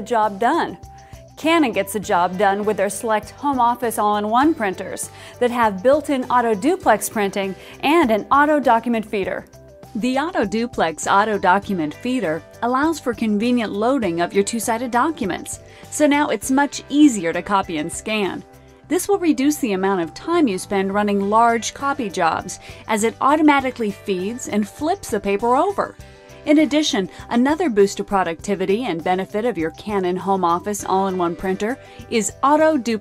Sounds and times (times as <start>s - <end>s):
Speech: 0.0s - 0.8s, 1.4s - 9.4s, 10.0s - 33.0s
Music: 0.0s - 33.0s.